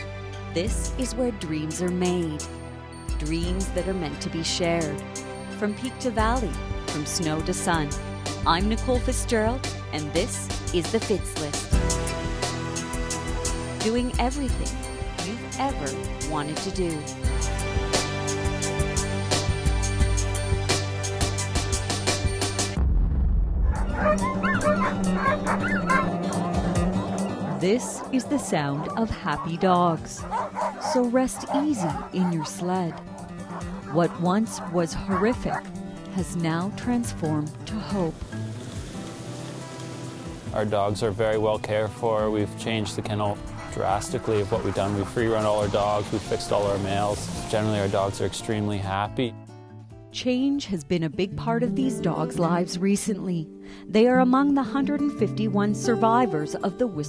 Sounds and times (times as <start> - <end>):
Music: 0.0 - 57.0
Speech: 0.6 - 2.4, 3.2 - 5.0, 5.6 - 11.7, 13.8 - 17.1, 27.6 - 30.2, 30.9 - 33.0, 33.9 - 35.6, 36.2 - 38.2, 40.6 - 49.4, 50.2 - 57.0
Dog: 23.8 - 26.5, 27.2 - 29.6, 30.2 - 35.7.